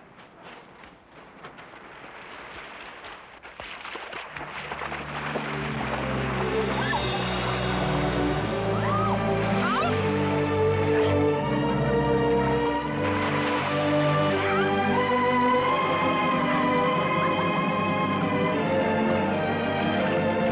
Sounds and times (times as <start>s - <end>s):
Music: 4.4s - 20.5s.